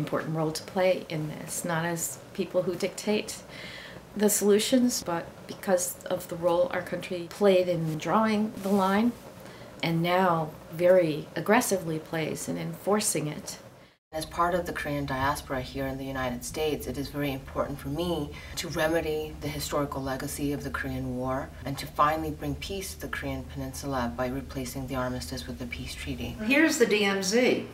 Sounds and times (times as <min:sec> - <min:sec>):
Speech: 0:00.0 - 0:03.4, 0:04.2 - 0:09.2, 0:09.8 - 0:13.6, 0:14.2 - 0:27.7
Inside, small room: 0:00.0 - 0:27.7.